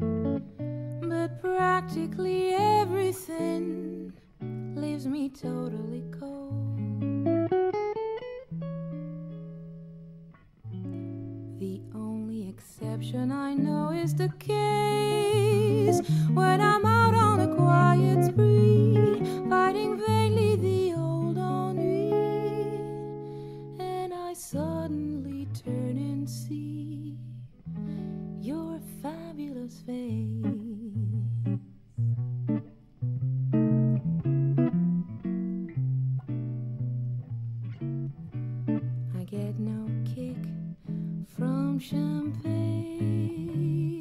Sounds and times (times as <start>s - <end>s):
Strum: 0.0s - 44.0s.